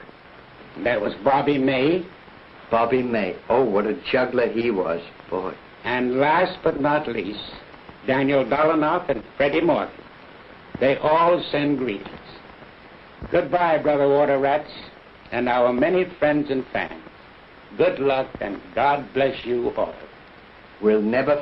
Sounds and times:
Speech: 0:00.8 - 0:02.1, 0:02.7 - 0:10.0, 0:10.8 - 0:12.4, 0:13.3 - 0:17.1, 0:17.7 - 0:20.1, 0:20.8 - 0:21.4.

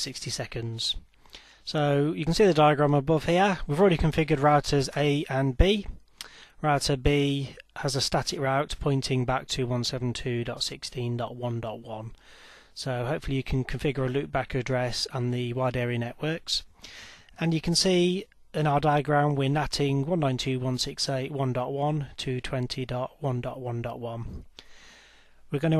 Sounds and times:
Speech: 0:00.0 - 0:01.0, 0:01.7 - 0:06.0, 0:06.6 - 0:12.2, 0:12.8 - 0:16.7, 0:17.4 - 0:24.4, 0:25.5 - 0:25.7.

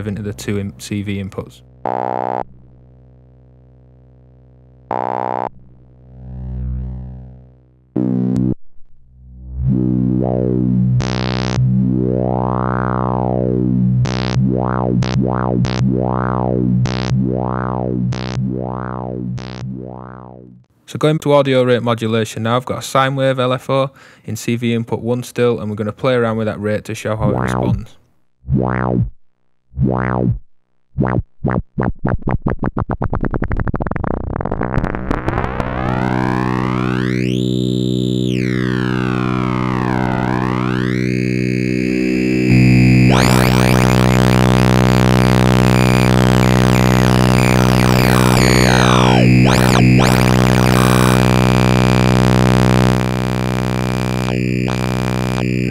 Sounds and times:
Speech: 0:00.0 - 0:01.6, 0:20.9 - 0:28.0
Synthesizer: 0:35.6 - 0:55.7.

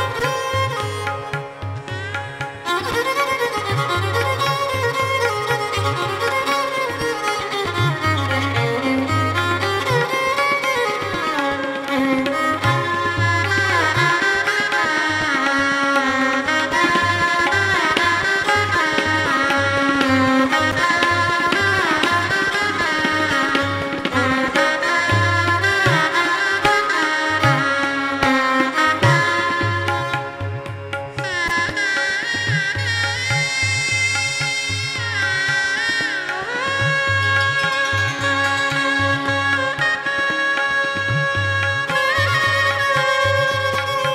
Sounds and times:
Carnatic music: 0:00.0 - 0:44.1
Musical instrument: 0:23.5 - 0:44.1.

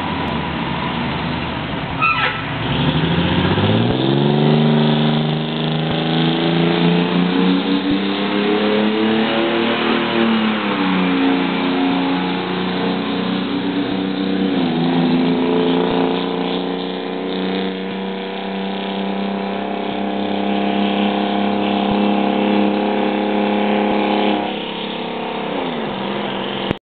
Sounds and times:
Truck: 0:00.0 - 0:26.8.

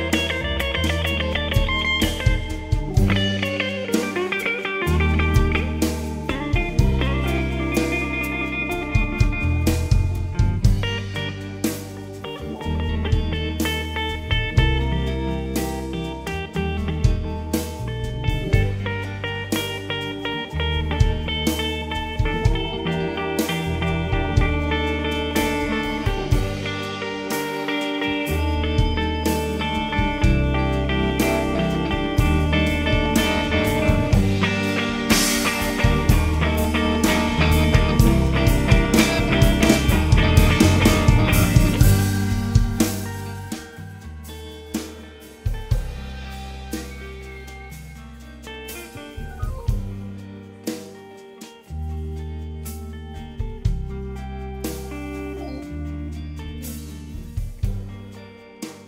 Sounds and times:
Rock music: 0:00.0 - 0:58.8.

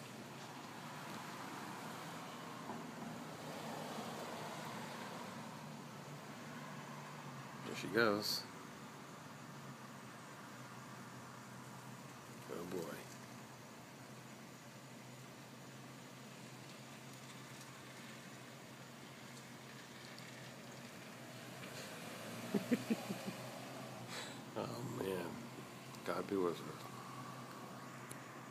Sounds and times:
Car passing by: 0:00.0 - 0:08.5, 0:19.1 - 0:28.5
Speech: 0:07.6 - 0:08.5, 0:12.4 - 0:13.1, 0:26.0 - 0:26.8.

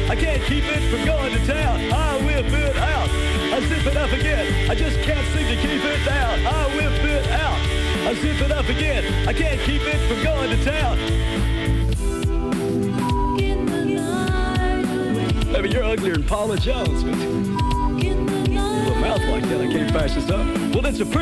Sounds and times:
Music: 0:00.0 - 0:21.2.

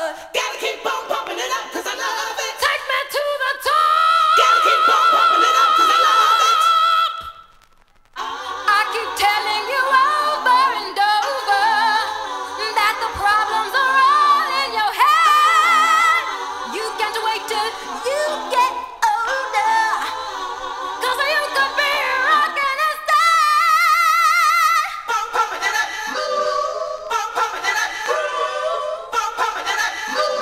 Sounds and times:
Vocal music: 0:00.0 - 0:07.4, 0:08.2 - 0:30.4.

